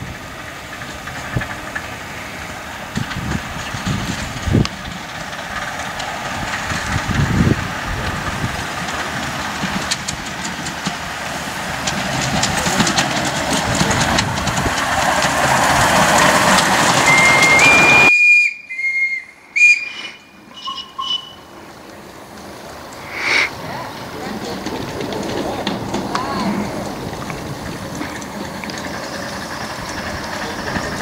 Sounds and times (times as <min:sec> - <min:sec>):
Whistle: 0:17.0 - 0:21.6.